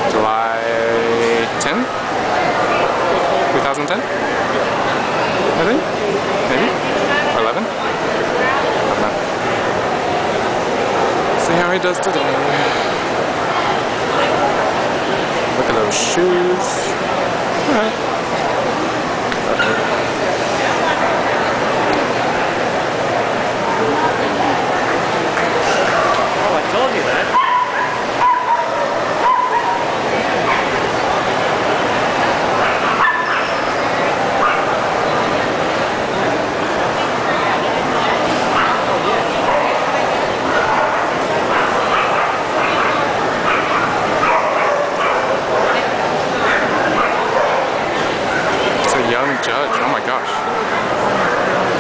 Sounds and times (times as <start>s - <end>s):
Bow-wow: 27.3s - 29.8s, 32.6s - 33.8s, 34.4s - 34.8s, 40.5s - 48.5s.